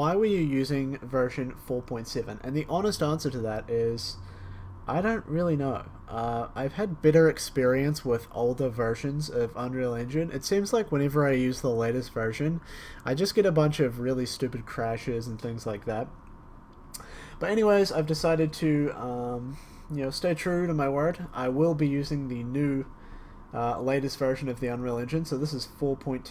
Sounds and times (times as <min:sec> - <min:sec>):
Speech: 0:00.0 - 0:04.2, 0:04.9 - 0:16.1, 0:17.4 - 0:22.9, 0:23.6 - 0:26.3.